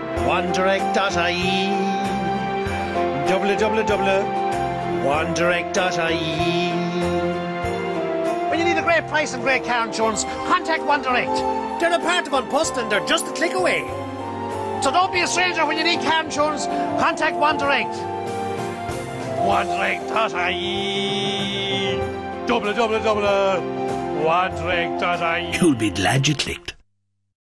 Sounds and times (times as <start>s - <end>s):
Music: 0.0s - 26.8s
Speech: 24.2s - 26.8s.